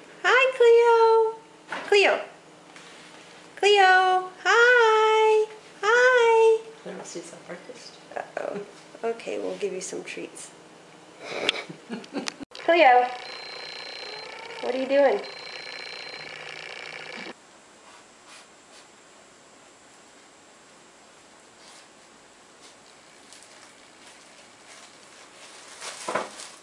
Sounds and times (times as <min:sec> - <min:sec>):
Speech: 0:00.2 - 0:02.4, 0:03.6 - 0:10.6, 0:12.6 - 0:13.2, 0:14.6 - 0:15.2.